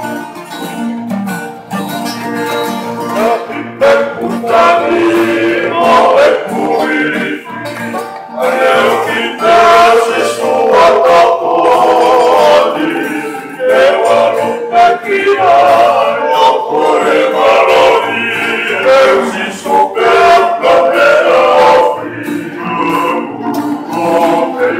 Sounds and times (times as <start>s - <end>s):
Inside, large room or hall: 0.0s - 24.7s
Music: 0.0s - 24.7s
Singing: 3.2s - 7.6s, 8.4s - 24.7s.